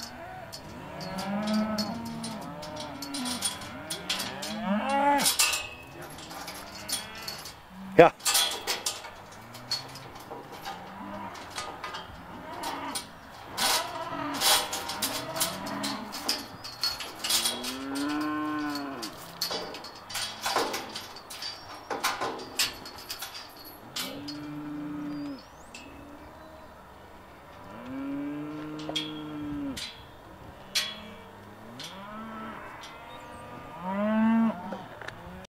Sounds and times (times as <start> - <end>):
Moo: 0.0 - 5.4, 12.3 - 16.5, 17.2 - 19.6, 24.0 - 25.4, 27.6 - 29.9, 30.6 - 35.5.